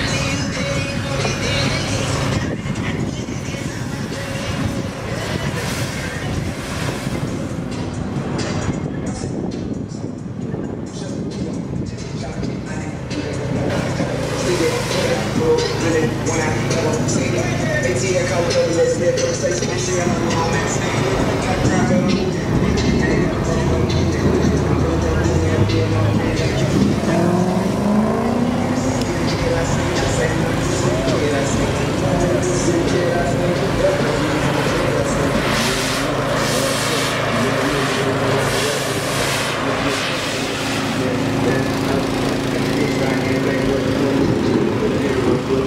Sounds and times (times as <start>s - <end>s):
Car: 0.0s - 45.6s.